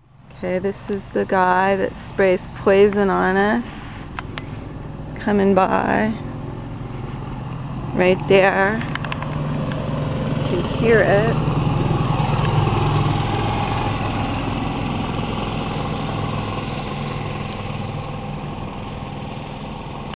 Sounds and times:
Vehicle: 0.0 - 20.1
Speech: 0.4 - 3.7, 5.2 - 6.2, 8.0 - 8.9, 10.5 - 11.4.

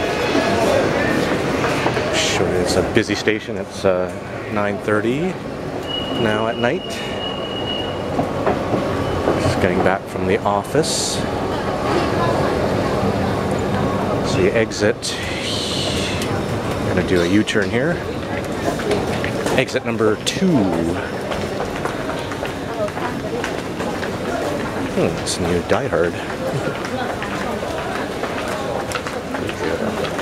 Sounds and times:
Speech: 2.1 - 5.4, 6.1 - 7.2, 9.4 - 12.8, 13.7 - 18.4, 19.5 - 21.6, 22.7 - 30.2
Walk, footsteps: 21.3 - 24.7, 26.2 - 30.2.

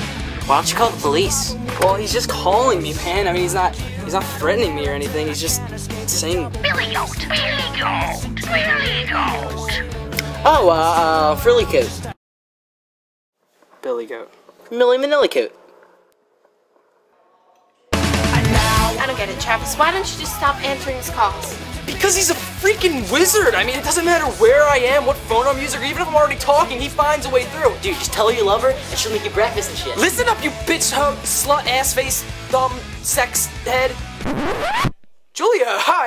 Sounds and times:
Music: 0.0 - 12.2, 17.9 - 34.9
Speech: 0.5 - 9.8, 10.4 - 12.1, 13.8 - 15.6, 18.6 - 34.0, 35.4 - 36.0.

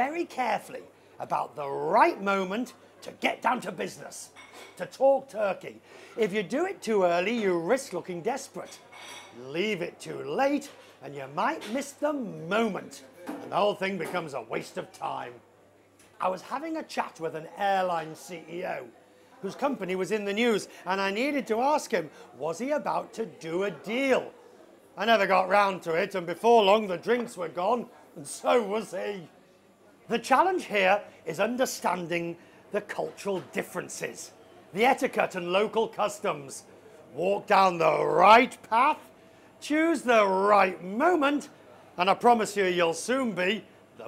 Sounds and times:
Speech: 0.0 - 15.4, 16.2 - 24.4, 25.0 - 29.4, 30.0 - 44.0.

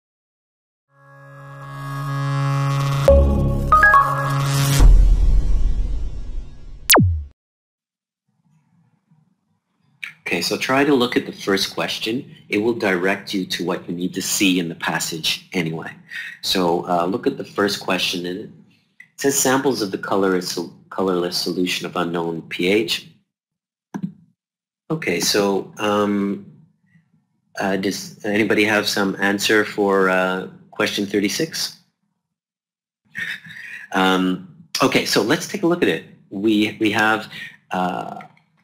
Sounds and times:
Music: 0.9 - 7.1.

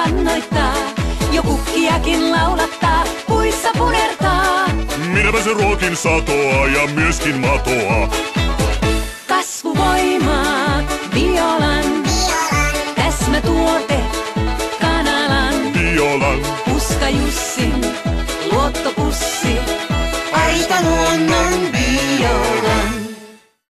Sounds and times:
Music: 0.0 - 23.7.

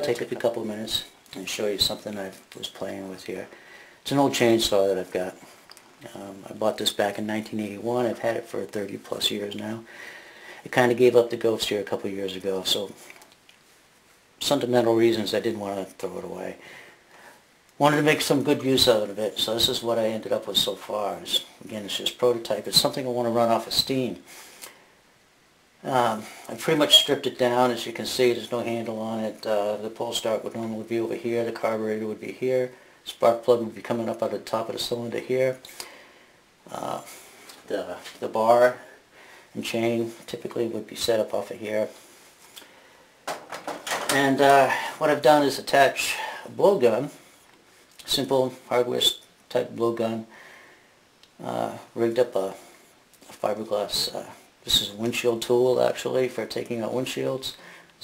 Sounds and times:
Speech: 0.0 - 9.9, 10.6 - 13.1, 14.4 - 16.6, 17.8 - 24.3, 25.8 - 35.7, 36.7 - 39.0, 39.6 - 42.0, 43.9 - 47.2, 48.0 - 50.4, 51.4 - 58.0.

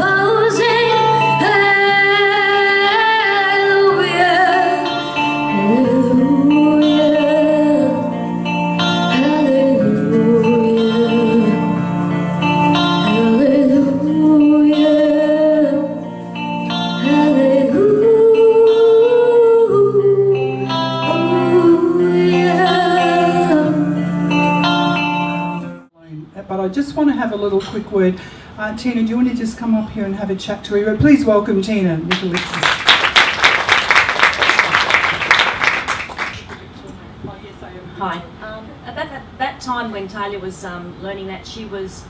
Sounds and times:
Female singing: 0.0 - 8.1, 9.1 - 11.7, 13.0 - 16.0, 17.0 - 24.0
Music: 0.0 - 26.0.

